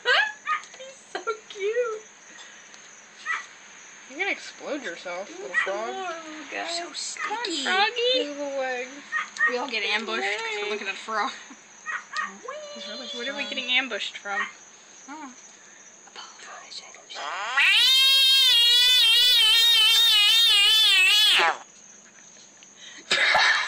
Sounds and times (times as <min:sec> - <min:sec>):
Speech: 0:12.4 - 0:14.5
Frog: 0:17.1 - 0:21.7.